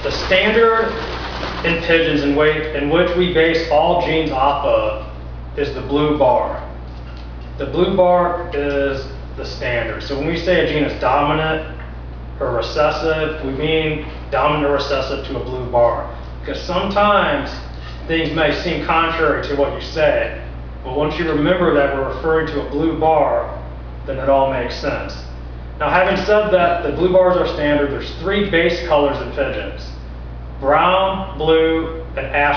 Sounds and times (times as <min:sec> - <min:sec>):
Speech: 0:00.0 - 0:01.0, 0:01.6 - 0:06.8, 0:07.6 - 0:11.8, 0:12.4 - 0:30.0, 0:30.6 - 0:32.5.